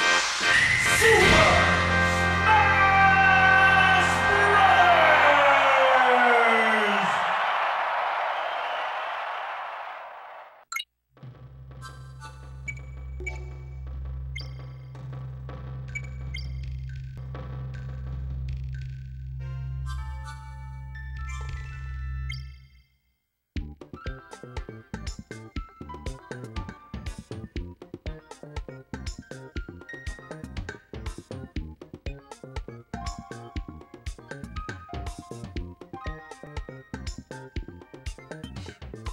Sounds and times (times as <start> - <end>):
Music: 0.0 - 6.5, 11.2 - 22.8, 23.6 - 39.1.